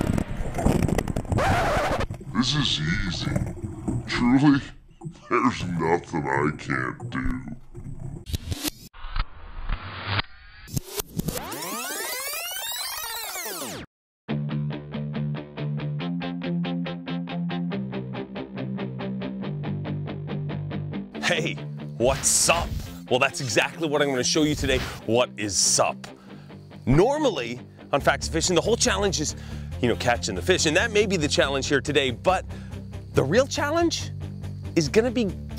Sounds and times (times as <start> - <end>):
Speech: 2.3 - 3.4, 4.1 - 7.6, 21.2 - 26.1, 26.9 - 32.4, 33.2 - 34.1, 34.8 - 35.4
Music: 11.7 - 35.5.